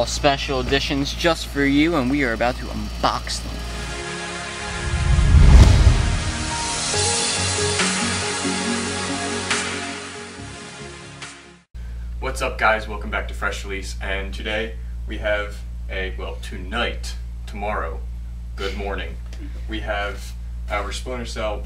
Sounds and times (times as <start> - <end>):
Speech: 0.0 - 3.6, 12.2 - 18.0, 18.6 - 21.6
Music: 3.7 - 11.6.